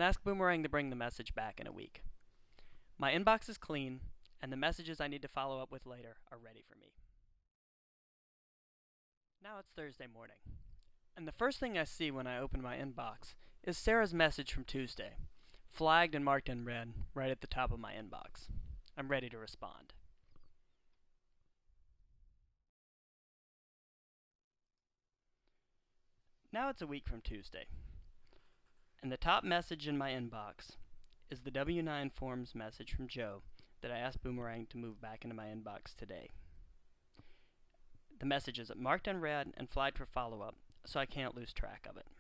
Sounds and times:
Narration, monologue: 0:00.0 - 0:07.3, 0:09.4 - 0:21.4, 0:25.5 - 0:42.2.

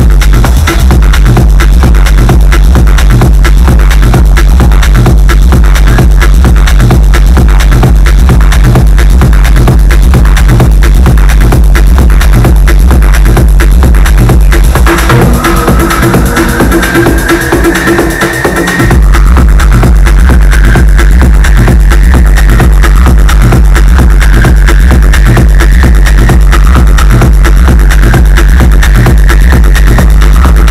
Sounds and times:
Electronic music: 0:00.0 - 0:30.7.

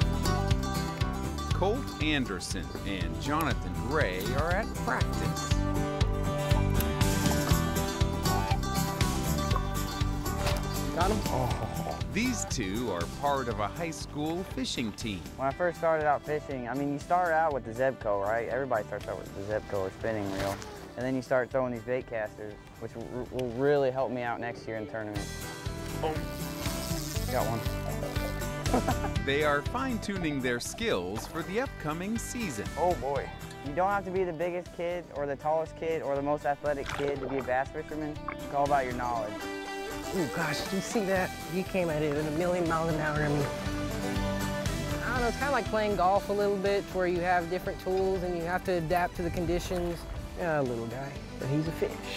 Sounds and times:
Music: 0:00.0 - 0:52.1.

